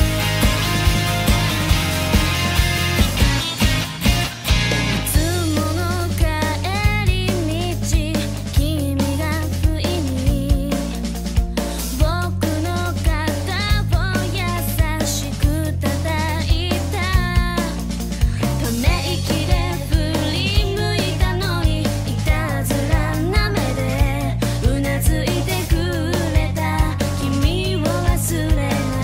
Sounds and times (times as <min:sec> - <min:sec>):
Music for children: 0:00.0 - 0:29.0.